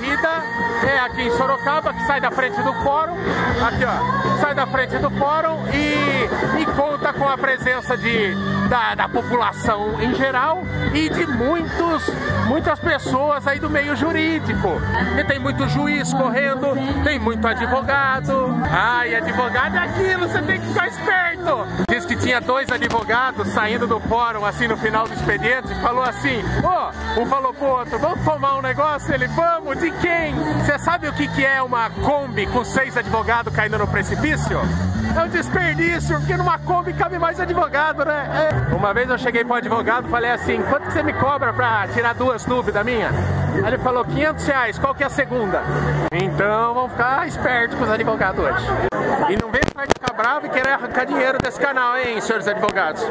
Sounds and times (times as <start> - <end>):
Music: 0.0 - 53.1.